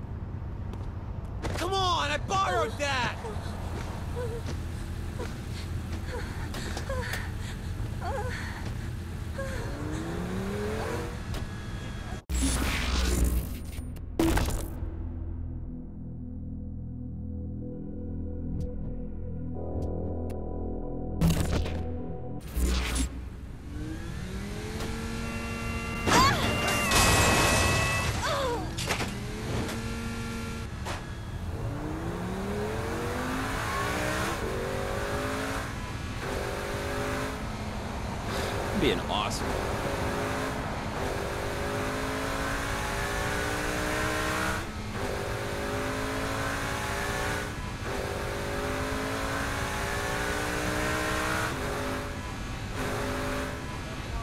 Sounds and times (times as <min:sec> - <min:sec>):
Car: 0:00.0 - 0:15.8, 0:22.4 - 0:54.2.